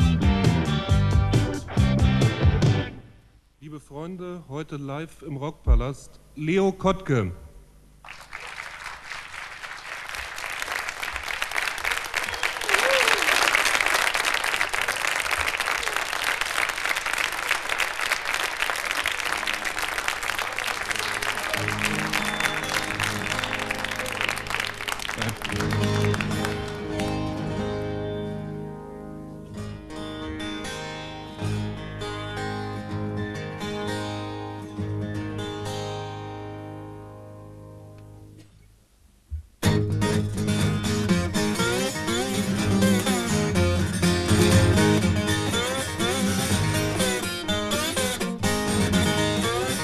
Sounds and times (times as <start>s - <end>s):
Music: 0.0s - 3.2s, 18.9s - 38.4s, 39.3s - 49.8s.